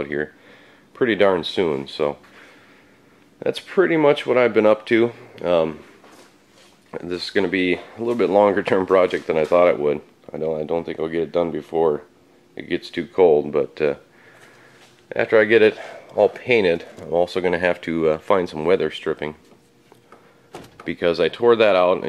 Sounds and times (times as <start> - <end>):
Speech: 0.0 - 0.4, 1.0 - 2.2, 3.4 - 5.9, 6.9 - 14.1, 15.1 - 19.4, 20.9 - 22.0.